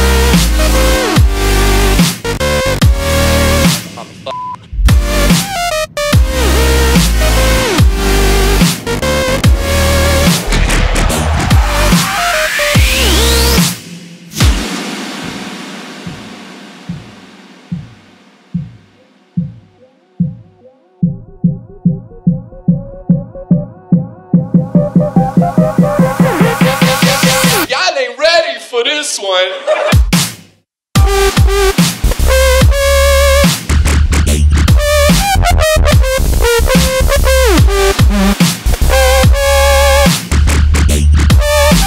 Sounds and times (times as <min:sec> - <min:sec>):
Dubstep: 0:00.0 - 0:17.1, 0:24.8 - 0:27.7, 0:31.0 - 0:41.8.